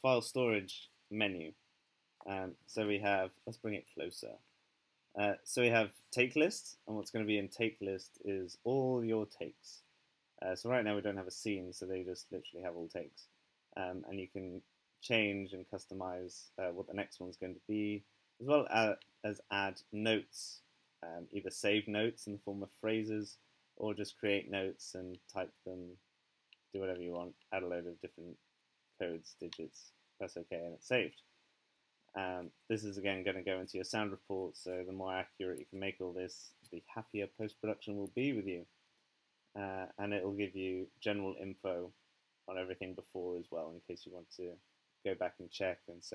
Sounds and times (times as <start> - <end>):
Speech: 0.0 - 1.6, 2.2 - 4.4, 5.2 - 26.0, 26.8 - 28.4, 29.0 - 31.2, 32.2 - 38.7, 39.6 - 41.9, 42.5 - 46.1.